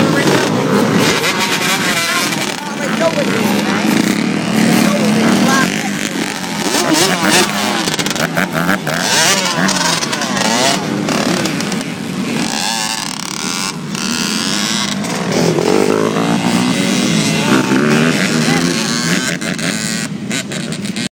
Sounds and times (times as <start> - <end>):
Speech: 1.8 - 3.9, 17.3 - 19.2.